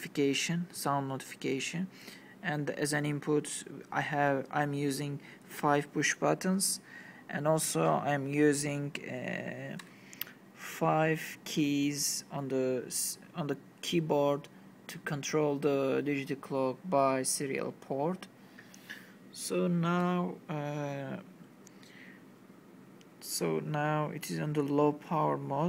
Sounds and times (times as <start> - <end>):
Speech: 0.0 - 9.8, 10.6 - 18.3, 19.3 - 21.3, 23.2 - 25.6.